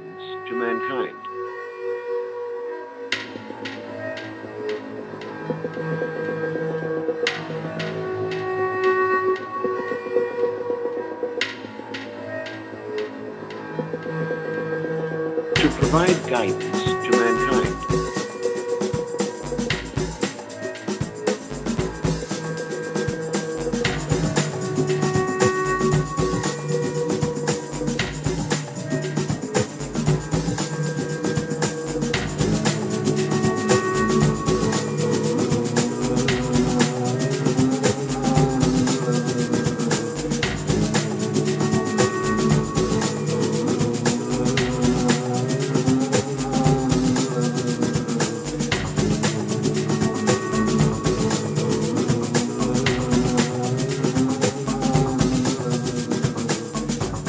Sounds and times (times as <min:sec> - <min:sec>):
Music: 0:00.0 - 0:57.2.